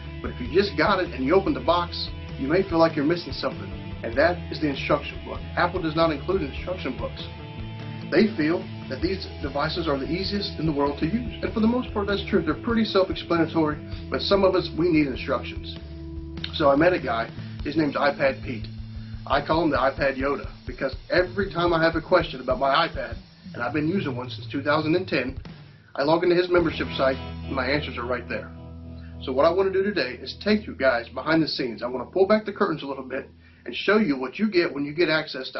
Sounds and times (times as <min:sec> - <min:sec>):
Music: 0:00.0 - 0:35.5
Speech: 0:00.3 - 0:07.3, 0:08.2 - 0:15.8, 0:16.5 - 0:18.7, 0:19.3 - 0:25.4, 0:26.0 - 0:28.5, 0:29.2 - 0:35.5.